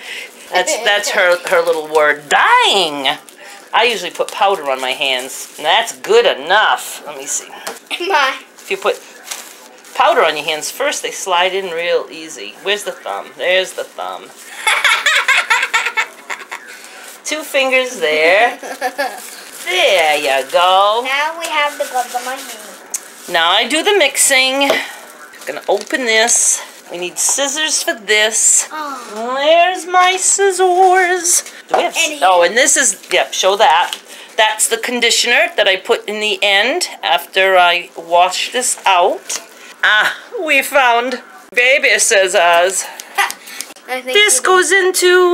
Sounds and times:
Belly laugh: 14.5 - 16.8, 18.4 - 19.2.

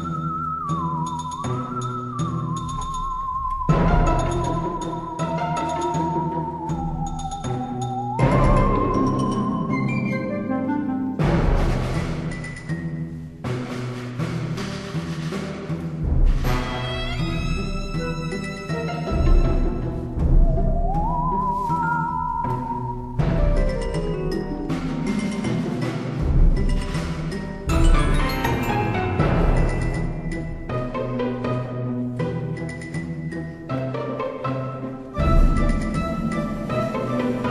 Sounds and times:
Music: 0.0 - 37.5.

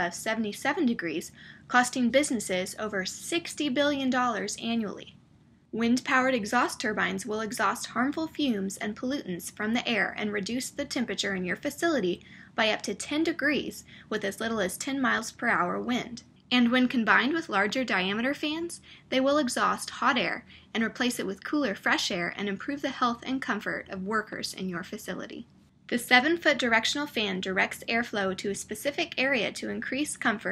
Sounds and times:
Speech: 0.0 - 5.1, 5.8 - 30.5.

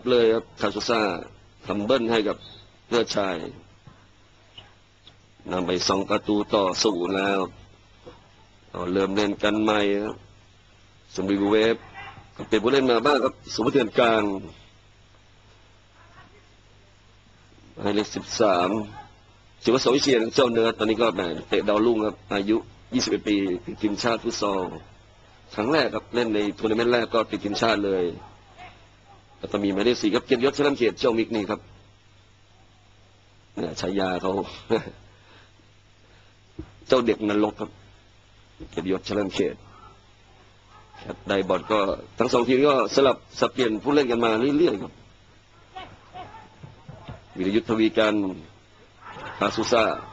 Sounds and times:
Speech: 0.0 - 3.6, 5.4 - 7.6, 8.7 - 10.2, 11.1 - 14.6, 17.8 - 24.9, 25.5 - 31.7, 33.6 - 34.9, 36.9 - 37.8, 38.6 - 39.7, 40.8 - 45.0, 47.0 - 48.5, 49.3 - 50.1.

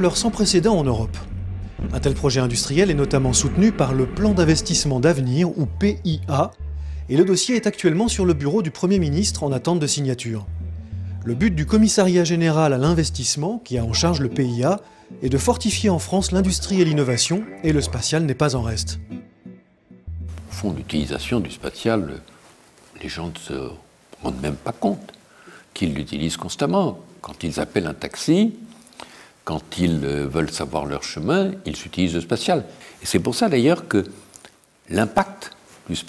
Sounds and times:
Speech: 0.0 - 1.3, 1.9 - 10.5, 11.2 - 19.0, 20.5 - 22.3, 23.0 - 25.2, 25.8 - 28.7, 29.5 - 34.2, 34.9 - 36.0
Music: 0.0 - 21.7.

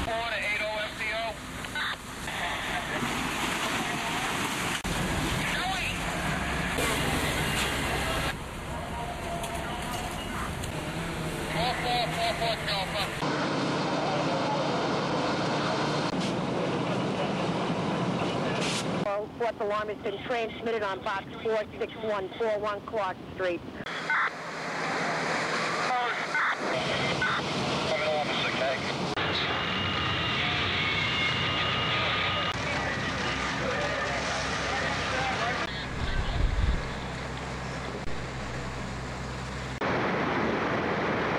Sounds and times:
Fire: 0.0 - 41.3
Wind noise (microphone): 35.9 - 37.0.

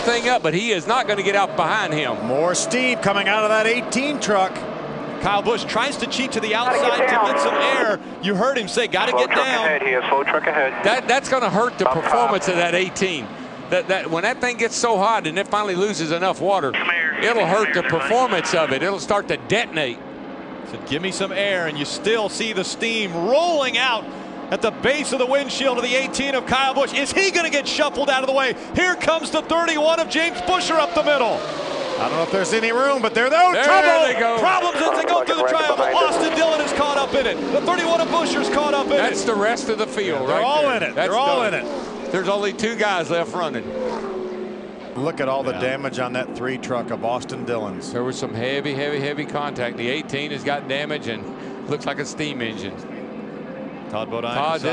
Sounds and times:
Speech: 0.0 - 4.6, 5.2 - 20.0, 20.7 - 31.4, 32.0 - 43.6, 45.0 - 52.8, 53.9 - 54.7
Car: 0.0 - 54.7.

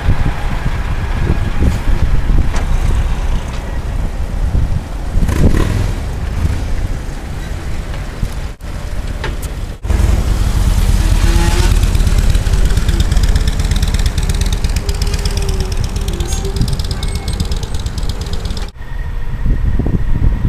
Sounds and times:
Wind noise (microphone): 0.0 - 8.6, 9.5 - 18.1, 18.8 - 20.4.

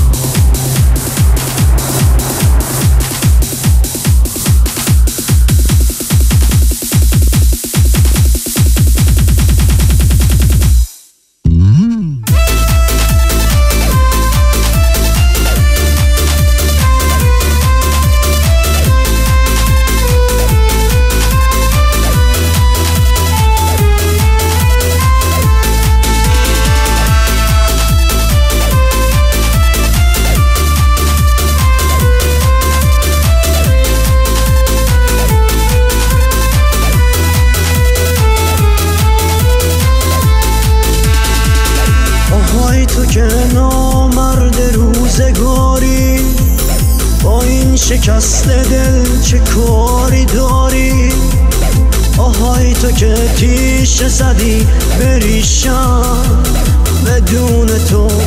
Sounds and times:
Music: 0.0 - 58.2.

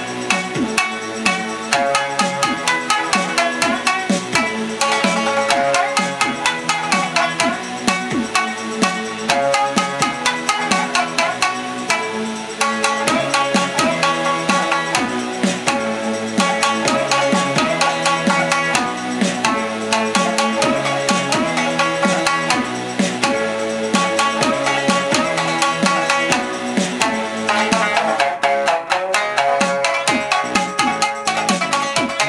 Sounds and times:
Banjo: 0.0 - 32.2
Guitar: 0.0 - 32.2
Pop music: 0.0 - 32.2.

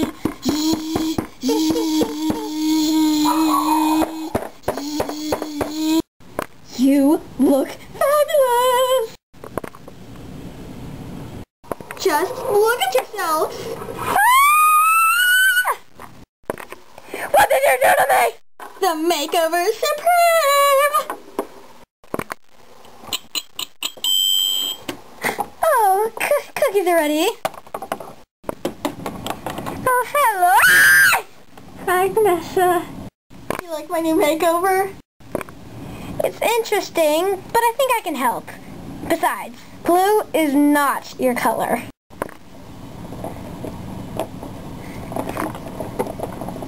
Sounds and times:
Inside, small room: 0.0 - 46.6
Speech: 6.7 - 9.2, 12.0 - 13.6, 17.3 - 21.1, 25.6 - 27.4, 36.2 - 41.9.

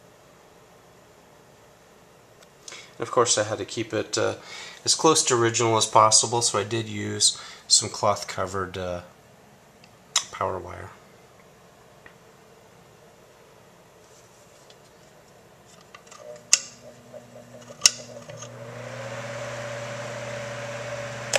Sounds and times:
Mechanical fan: 16.6 - 21.3.

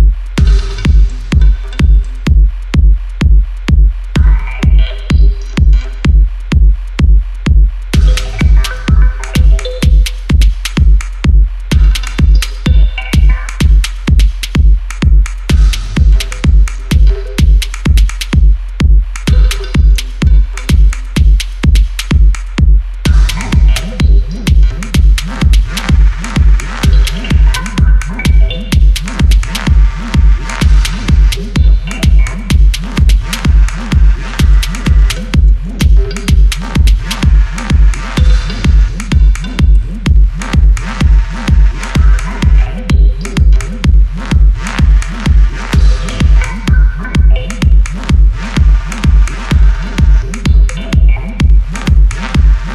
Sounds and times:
Music: 0.0 - 52.7.

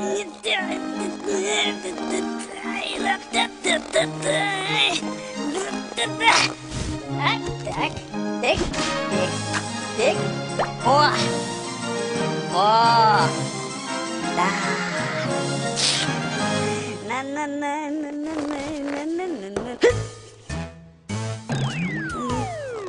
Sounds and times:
Music: 0.0 - 22.8
Speech: 12.5 - 13.4.

